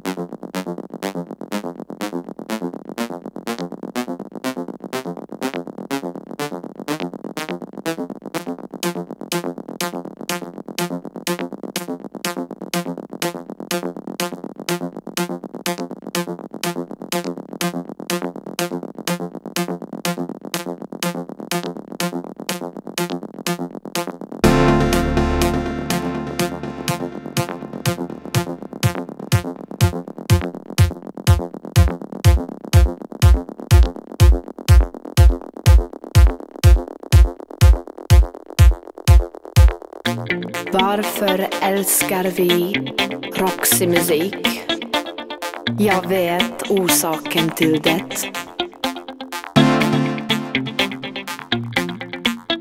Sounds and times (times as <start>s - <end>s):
Drum machine: 0.0s - 52.6s.